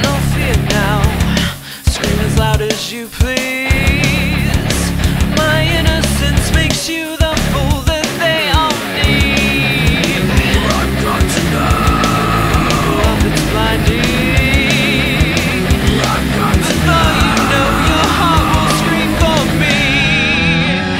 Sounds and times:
Music: 0:00.0 - 0:20.9.

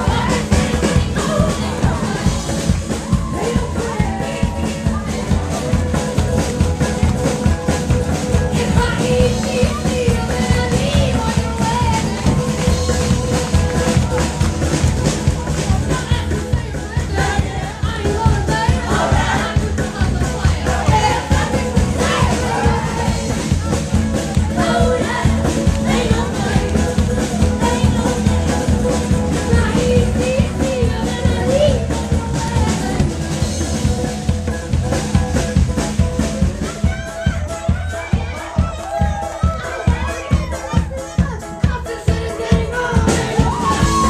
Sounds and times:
Music: 0:00.0 - 0:44.1.

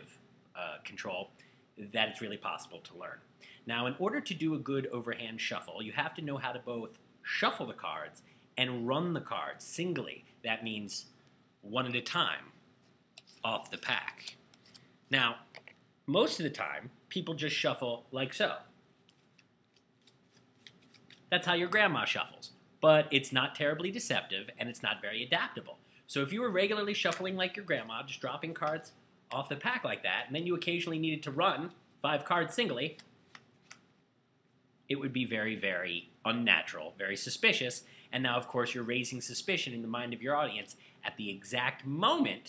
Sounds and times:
Speech: 0:00.0 - 0:12.6, 0:13.3 - 0:14.4, 0:15.1 - 0:18.7, 0:21.3 - 0:33.0, 0:34.9 - 0:42.4.

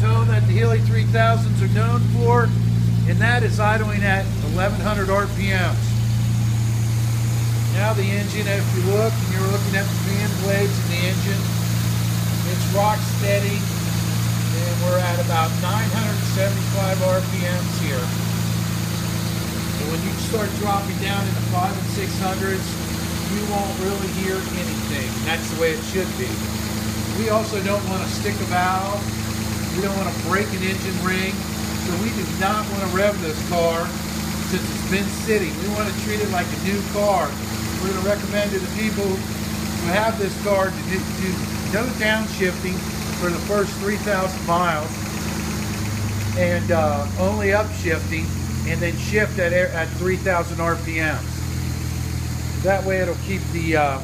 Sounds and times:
Speech: 0:00.0 - 0:06.0, 0:07.7 - 0:11.6, 0:12.4 - 0:13.8, 0:14.4 - 0:18.2, 0:19.8 - 0:45.0, 0:46.3 - 0:51.4, 0:52.6 - 0:54.0
Engine: 0:00.0 - 0:54.0
Vehicle: 0:00.0 - 0:54.0.

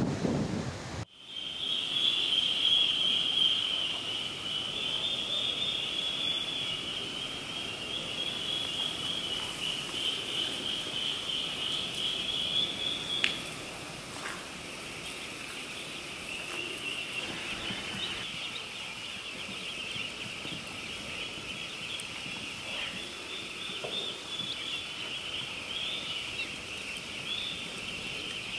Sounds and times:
Duck: 0:01.4 - 0:28.5.

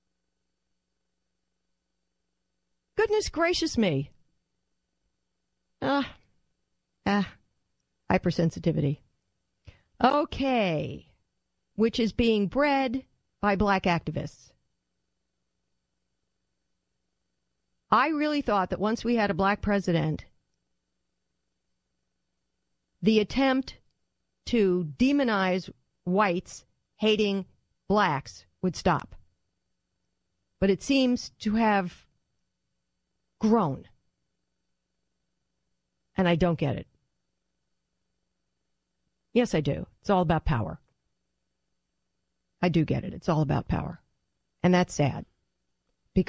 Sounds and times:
Speech: 0:03.0 - 0:04.2, 0:05.8 - 0:06.2, 0:07.0 - 0:07.4, 0:08.1 - 0:09.1, 0:10.0 - 0:11.2, 0:11.8 - 0:14.6, 0:17.9 - 0:20.3, 0:23.0 - 0:23.8, 0:24.4 - 0:29.2, 0:30.6 - 0:32.1, 0:33.4 - 0:34.0, 0:36.2 - 0:36.9, 0:39.3 - 0:40.9, 0:42.6 - 0:45.3.

